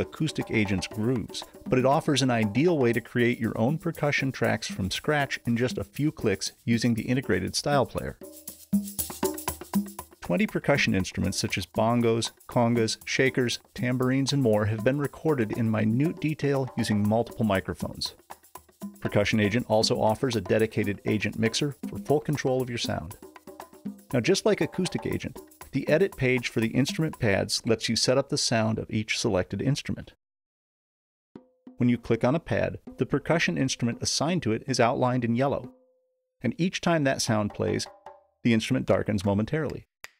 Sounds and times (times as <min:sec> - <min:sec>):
Speech: 0:00.0 - 0:08.2, 0:10.2 - 0:18.2, 0:19.0 - 0:23.2, 0:24.1 - 0:30.2, 0:31.8 - 0:35.7, 0:36.4 - 0:37.9, 0:38.5 - 0:39.9.